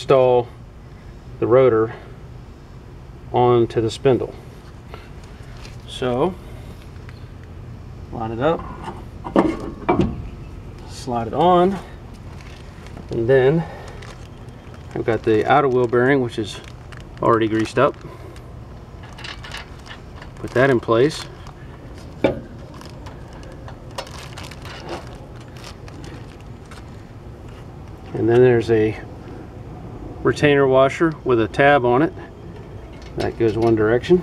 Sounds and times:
Speech: 0:00.0 - 0:00.5, 0:01.4 - 0:02.0, 0:03.3 - 0:04.4, 0:05.9 - 0:06.4, 0:08.1 - 0:08.6, 0:10.8 - 0:11.9, 0:13.1 - 0:13.7, 0:15.0 - 0:18.0, 0:20.4 - 0:21.3, 0:28.1 - 0:29.1, 0:30.2 - 0:32.3, 0:33.2 - 0:34.2.

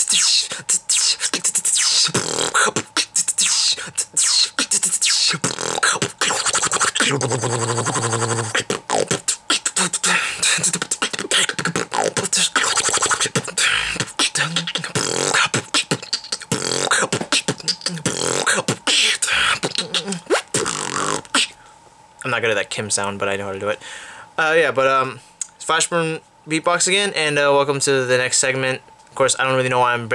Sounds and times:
Music: 0:00.0 - 0:07.1, 0:08.3 - 0:21.5
Speech: 0:22.2 - 0:23.8, 0:24.4 - 0:30.1.

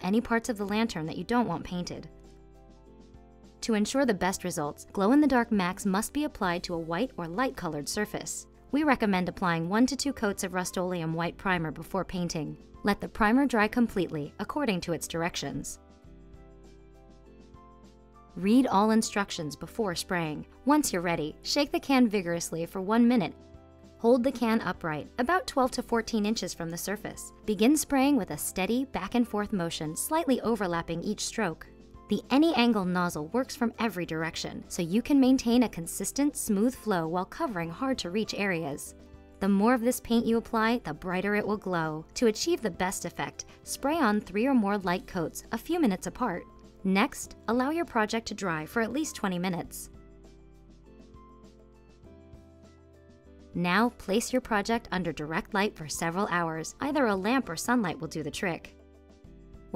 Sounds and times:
Speech: 0:00.0 - 0:02.1, 0:03.6 - 0:15.8, 0:18.4 - 0:23.4, 0:24.0 - 0:49.9, 0:53.6 - 0:58.7.

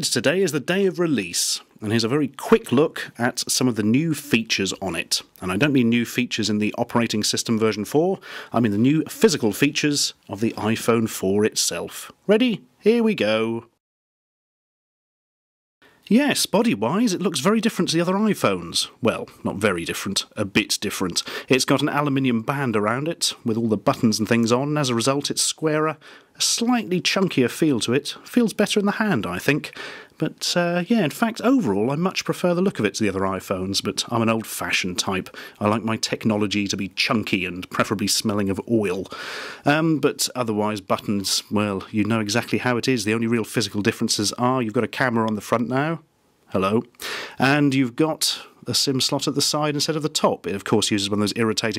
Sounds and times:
Speech: 0:00.0 - 0:13.8, 0:16.1 - 0:51.7.

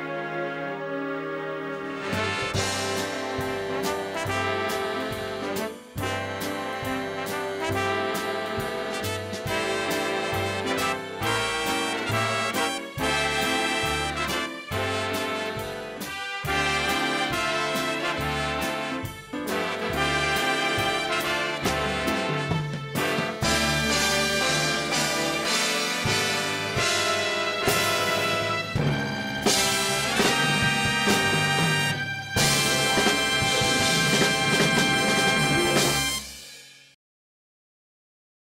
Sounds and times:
Music: 0:00.0 - 0:37.0.

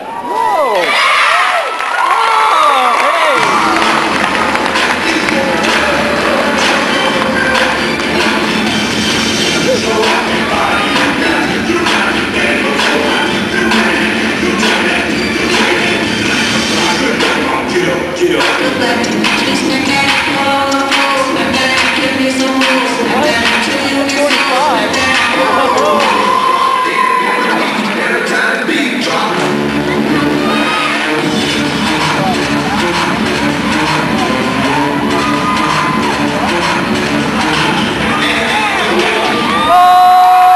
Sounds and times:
Cheering: 0:00.0 - 0:07.7, 0:25.4 - 0:28.1, 0:33.5 - 0:36.7, 0:37.4 - 0:40.5
Crowd: 0:00.0 - 0:40.5
Music: 0:03.3 - 0:40.5.

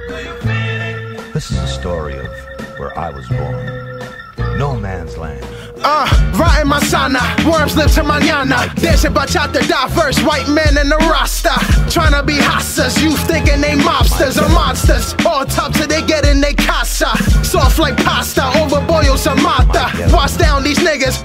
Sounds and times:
Hip hop music: 0:00.0 - 0:21.2
Speech: 0:01.4 - 0:03.7, 0:04.6 - 0:05.6.

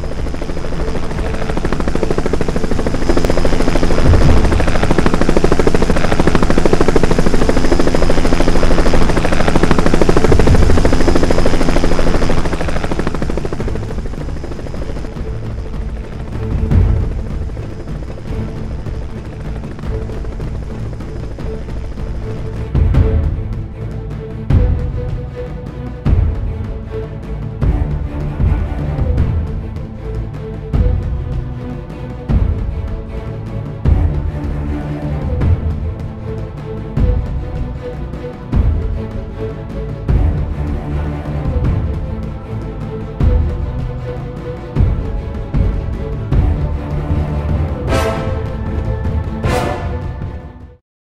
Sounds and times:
Helicopter: 0:00.0 - 0:50.8.

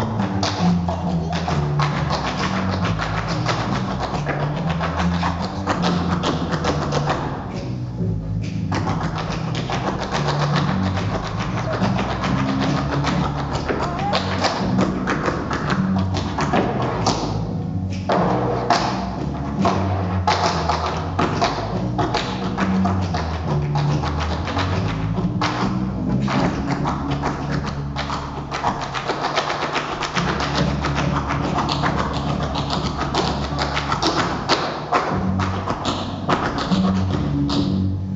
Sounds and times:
Speech: 0:13.7 - 0:14.4.

